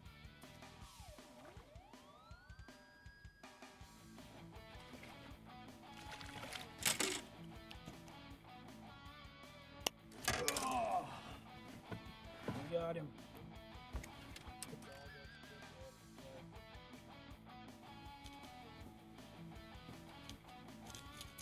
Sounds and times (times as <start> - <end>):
Music: 0.0 - 21.4
Speech: 12.5 - 13.1, 14.7 - 16.4.